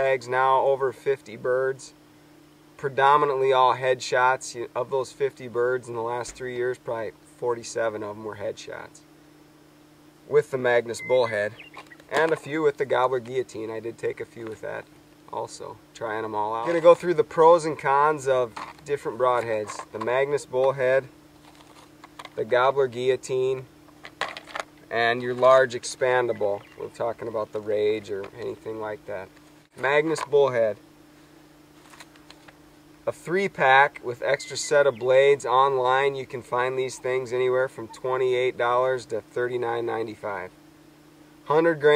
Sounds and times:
Speech: 0:00.0 - 0:02.0, 0:02.8 - 0:09.0, 0:10.3 - 0:21.1, 0:22.4 - 0:23.7, 0:24.9 - 0:30.8, 0:33.1 - 0:40.5, 0:41.5 - 0:41.9
Bird: 0:10.9 - 0:12.2, 0:26.1 - 0:27.2, 0:34.2 - 0:35.4, 0:36.4 - 0:38.1.

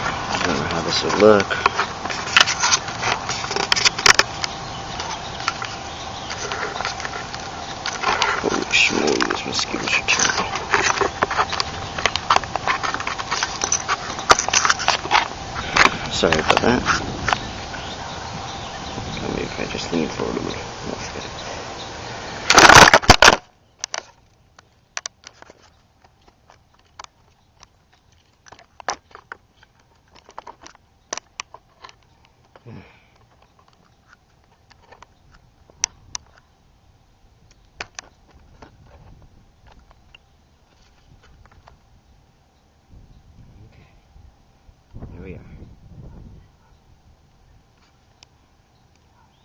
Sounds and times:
Outside, urban or manmade: 0:00.0 - 0:49.4.

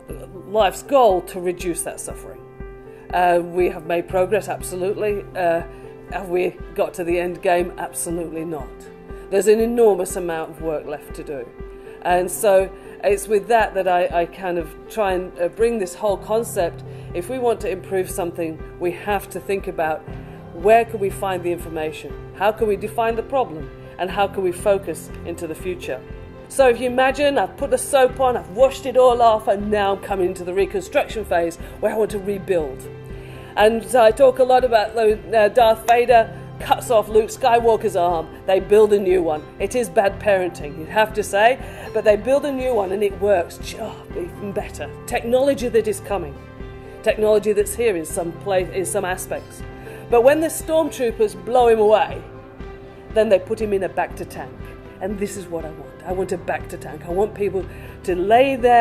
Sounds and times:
Music: 0:00.0 - 0:58.8
Speech: 0:00.1 - 0:02.4, 0:03.1 - 0:08.7, 0:09.4 - 0:11.5, 0:12.1 - 0:20.0, 0:20.6 - 0:32.8, 0:33.6 - 0:46.3, 0:47.1 - 0:49.4, 0:50.2 - 0:52.2, 0:53.2 - 0:58.8.

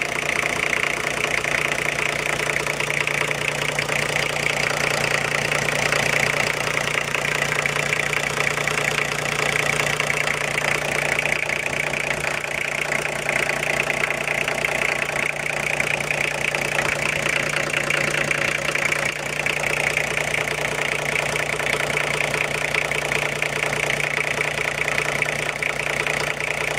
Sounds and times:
Car: 0:00.0 - 0:26.7
Idling: 0:00.0 - 0:26.7
Medium engine (mid frequency): 0:00.0 - 0:26.7.

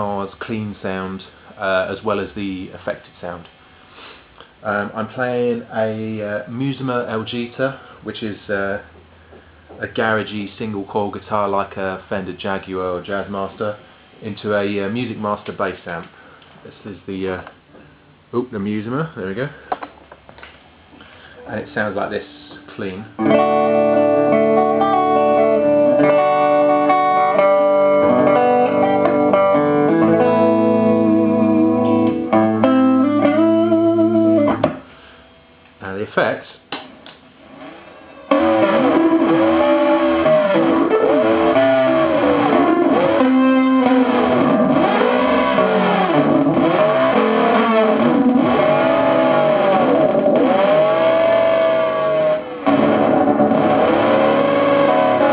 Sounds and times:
Speech: 0:00.0 - 0:03.5, 0:04.6 - 0:08.9, 0:09.8 - 0:17.6, 0:18.3 - 0:19.6, 0:21.4 - 0:23.2, 0:35.8 - 0:36.6.

